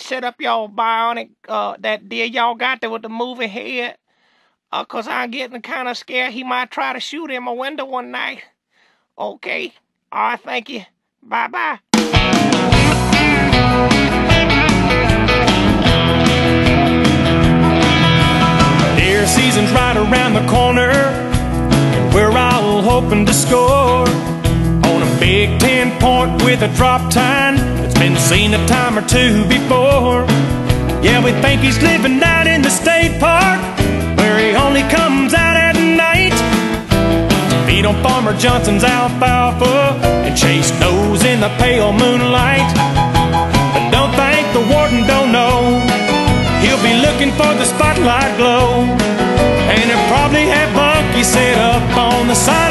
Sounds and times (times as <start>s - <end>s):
Speech: 0.0s - 4.0s, 4.7s - 8.5s, 9.2s - 11.8s
Music: 11.9s - 52.7s.